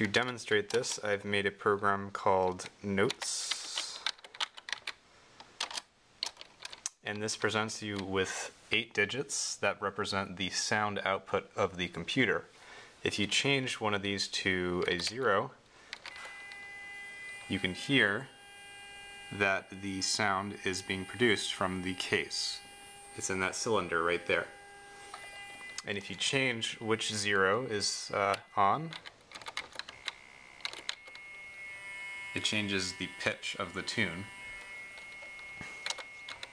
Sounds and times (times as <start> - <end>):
Speech: 0.0 - 4.1, 7.0 - 15.6, 17.5 - 18.3, 19.3 - 24.5, 25.8 - 29.0, 32.4 - 34.3.